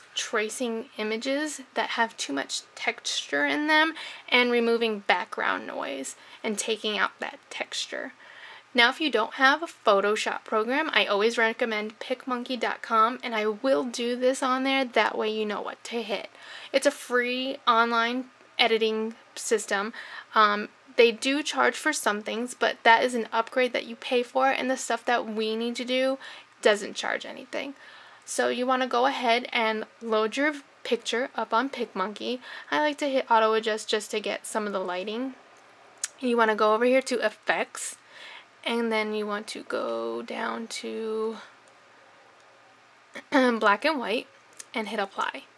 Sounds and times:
Speech: 0:00.2 - 0:08.2, 0:08.8 - 0:35.4, 0:36.0 - 0:38.0, 0:38.6 - 0:41.5, 0:43.2 - 0:45.5.

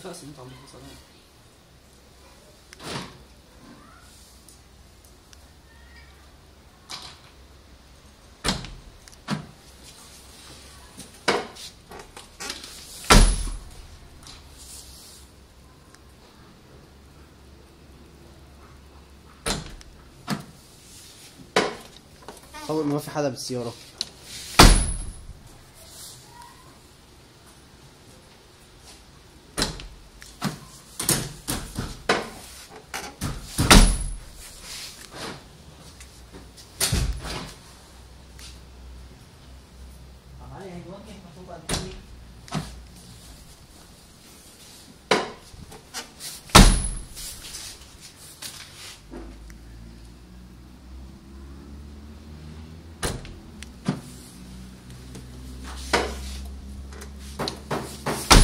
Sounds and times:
Door: 0:11.3 - 0:13.6, 0:24.6 - 0:25.2, 0:29.6 - 0:34.2, 0:46.6 - 0:47.2, 0:57.4 - 0:58.4.

